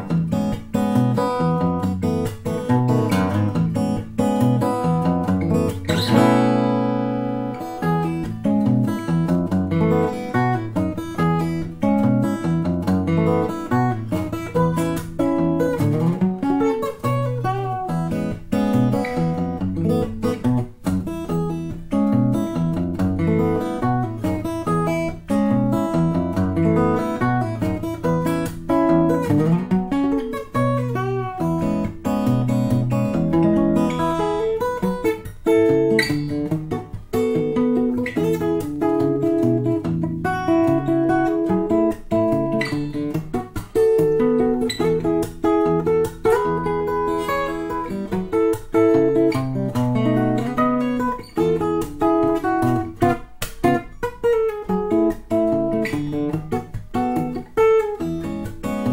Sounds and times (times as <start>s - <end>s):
Acoustic guitar: 0.0s - 58.9s
Strum: 0.0s - 58.9s.